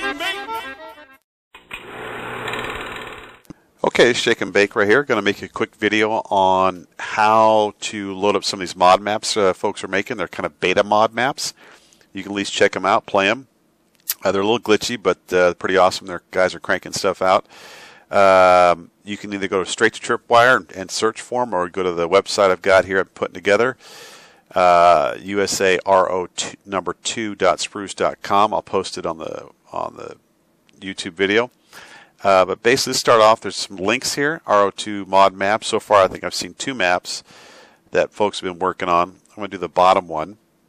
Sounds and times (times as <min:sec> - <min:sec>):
Speech: 0:03.8 - 0:11.6, 0:12.2 - 0:13.5, 0:14.1 - 0:17.5, 0:18.1 - 0:23.8, 0:24.5 - 0:30.2, 0:30.8 - 0:31.6, 0:32.2 - 0:37.3, 0:37.9 - 0:40.4.